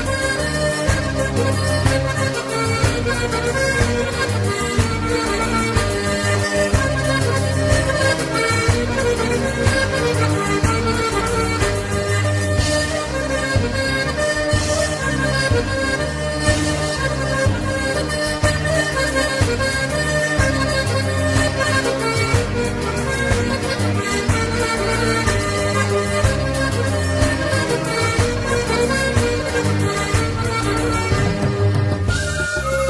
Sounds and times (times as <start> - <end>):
Traditional music: 0.0 - 32.9.